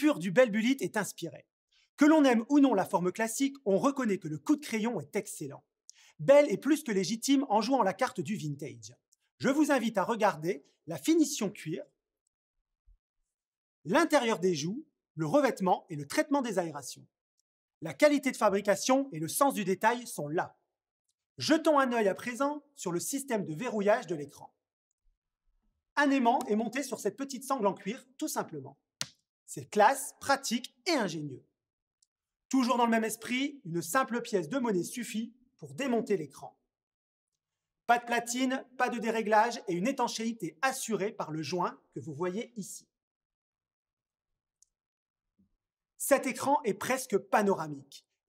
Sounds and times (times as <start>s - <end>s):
Speech: 0.0s - 11.9s, 13.9s - 17.1s, 17.8s - 20.6s, 21.4s - 24.6s, 26.0s - 28.8s, 29.5s - 31.4s, 32.5s - 36.6s, 37.9s - 42.9s, 46.0s - 48.1s.